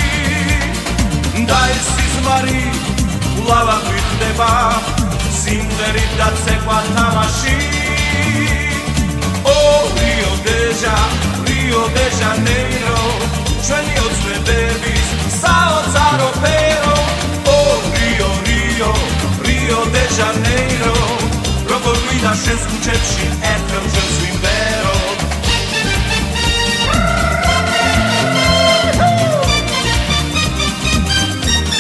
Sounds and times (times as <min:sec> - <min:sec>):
Salsa music: 0:00.0 - 0:31.8.